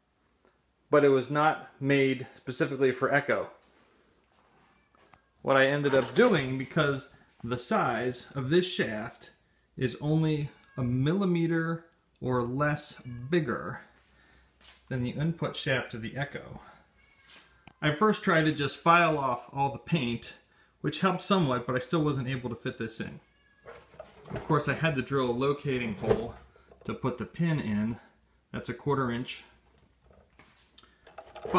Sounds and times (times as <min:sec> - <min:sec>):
Speech: 0:00.9 - 0:03.6, 0:05.4 - 0:13.9, 0:14.9 - 0:16.8, 0:17.8 - 0:23.2, 0:24.3 - 0:29.6.